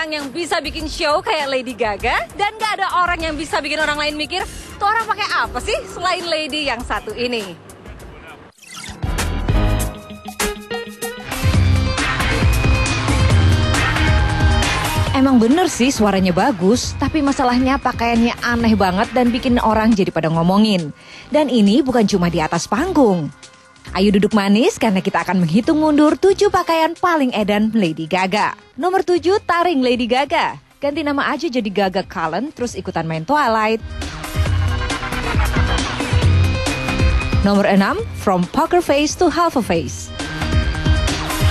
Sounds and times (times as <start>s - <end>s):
Music: 0.0s - 41.5s.